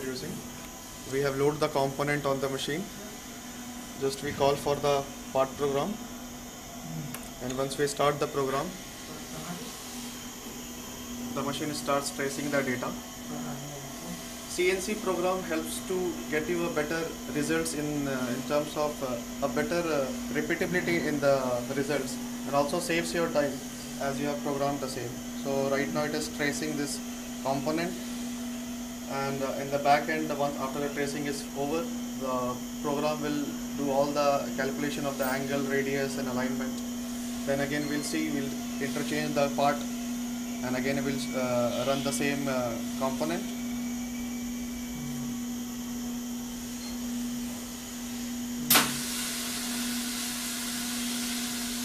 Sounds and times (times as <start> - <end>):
Speech: 0.0 - 0.4, 1.1 - 3.1, 4.0 - 6.0, 7.4 - 9.7, 11.4 - 28.0, 29.1 - 36.8, 37.5 - 39.9, 40.6 - 43.6.